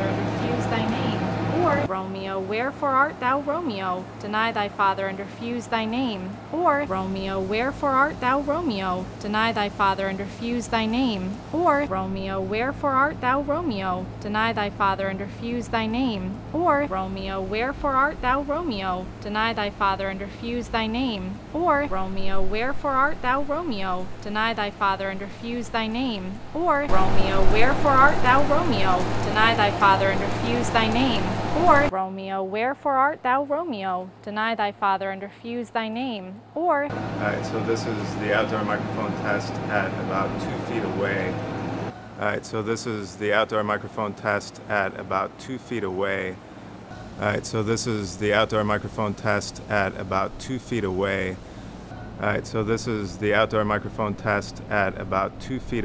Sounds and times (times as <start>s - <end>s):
Speech: 0.0s - 41.4s, 42.2s - 46.4s, 47.2s - 51.4s, 52.2s - 55.8s.